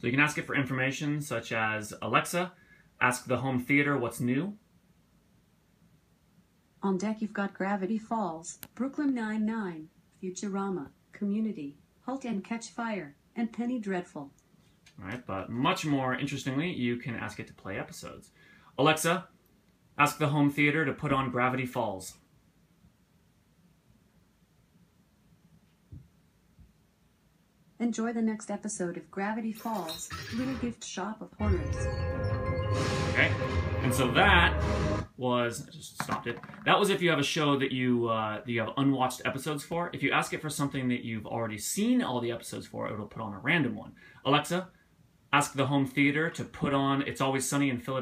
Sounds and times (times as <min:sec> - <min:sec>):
Speech: 0:00.0 - 0:04.6, 0:06.8 - 0:19.3, 0:20.0 - 0:22.2, 0:27.8 - 0:31.8, 0:33.2 - 0:34.6, 0:35.2 - 0:48.0
Music: 0:31.4 - 0:35.1.